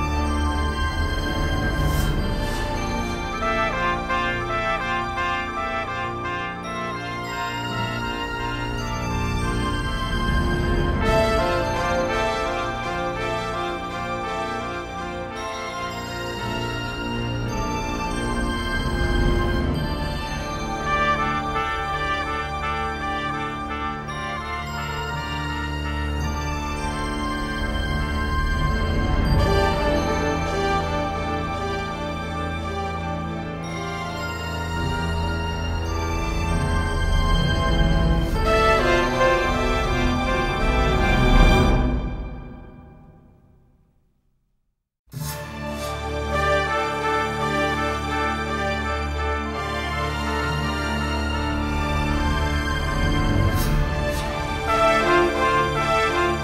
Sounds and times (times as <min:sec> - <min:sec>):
Soundtrack music: 0:00.0 - 0:43.6, 0:45.2 - 0:56.4.